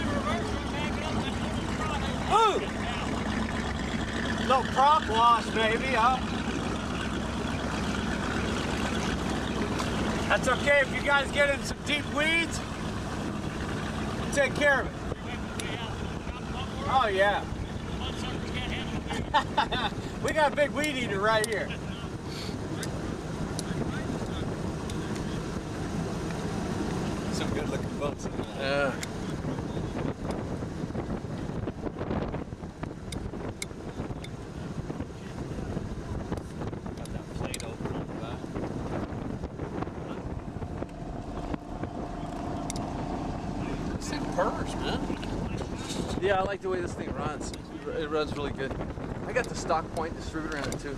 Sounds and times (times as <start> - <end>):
Motorboat, speedboat: 0.0 - 50.9
Speech: 10.3 - 12.6, 43.6 - 50.9.